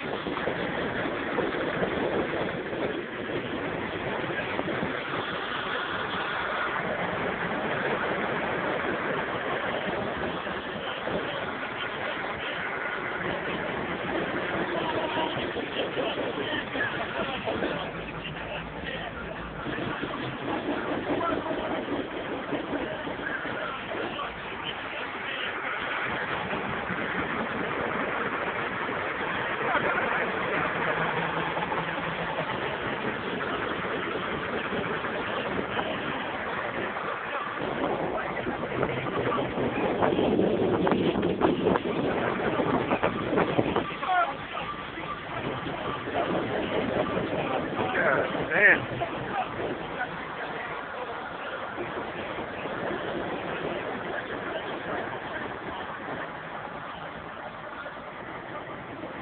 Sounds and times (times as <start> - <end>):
Speech: 9.5 - 26.6, 29.2 - 59.2.